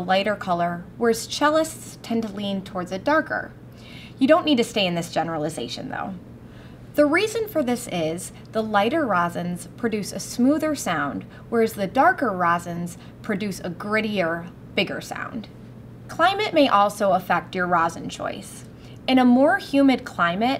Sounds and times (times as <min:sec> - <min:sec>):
Speech: 0:00.0 - 0:03.6, 0:04.2 - 0:06.2, 0:07.0 - 0:15.5, 0:16.1 - 0:20.5.